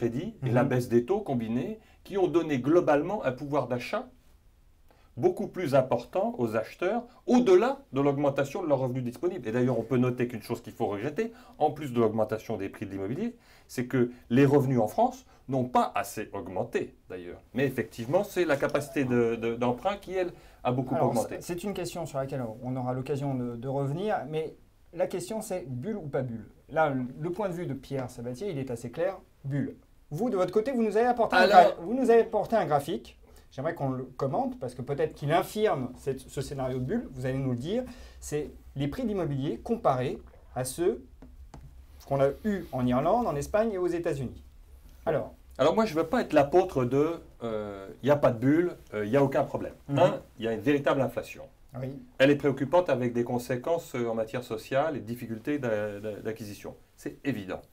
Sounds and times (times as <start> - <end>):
Speech: 0.0 - 4.2, 5.2 - 41.1, 42.0 - 57.7.